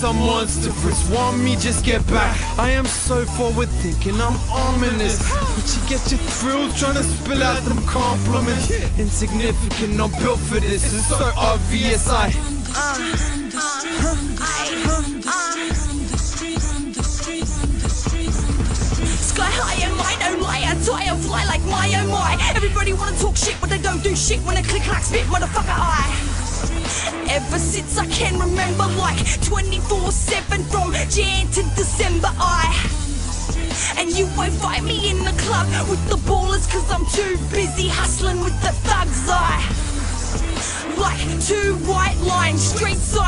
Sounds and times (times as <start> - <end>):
Music: 0.0 - 43.2.